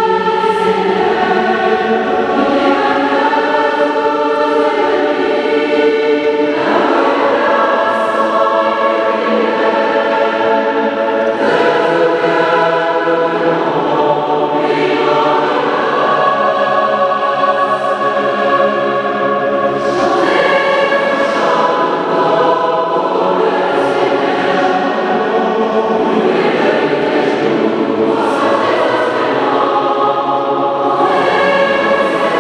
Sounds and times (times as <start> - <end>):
Mantra: 0.0 - 32.4.